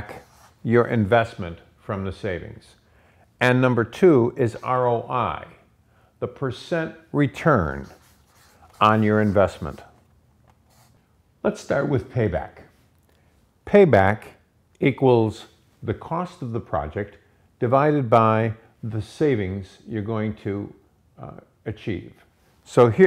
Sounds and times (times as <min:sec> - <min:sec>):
Speech: 0:00.0 - 0:02.8, 0:03.4 - 0:10.0, 0:11.4 - 0:12.8, 0:13.6 - 0:23.0.